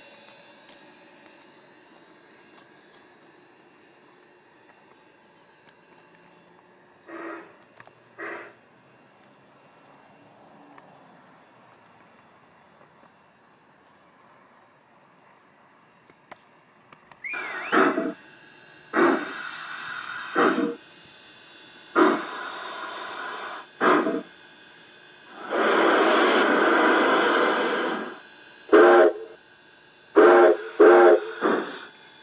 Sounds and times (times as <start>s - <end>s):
Railroad car, train wagon: 0.0s - 17.1s, 19.0s - 29.4s, 30.1s - 32.2s.